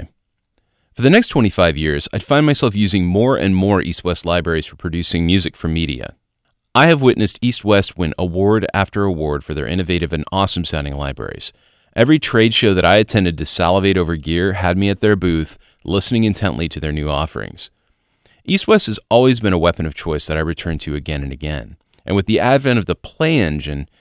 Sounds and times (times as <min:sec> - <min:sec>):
Speech: 0:01.0 - 0:06.2, 0:06.8 - 0:17.7, 0:18.4 - 0:23.9.